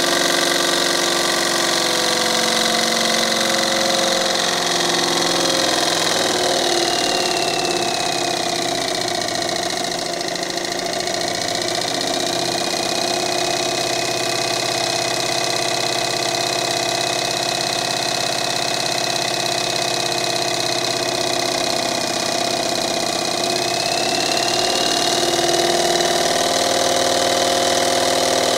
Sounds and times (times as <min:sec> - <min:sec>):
Idling: 0:00.0 - 0:28.5
Medium engine (mid frequency): 0:00.0 - 0:28.5
Accelerating, revving, vroom: 0:00.1 - 0:08.6, 0:23.8 - 0:28.5.